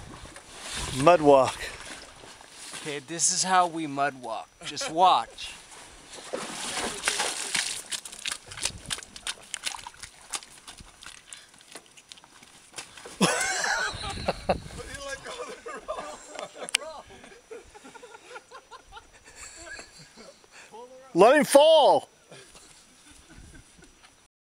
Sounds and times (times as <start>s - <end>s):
Speech: 1.0s - 1.6s, 2.8s - 5.6s, 20.8s - 22.1s.